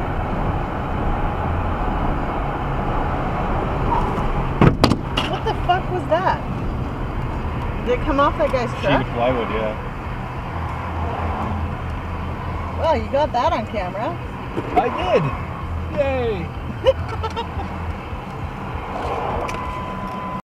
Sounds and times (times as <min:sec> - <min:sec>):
Car: 0:00.0 - 0:20.4.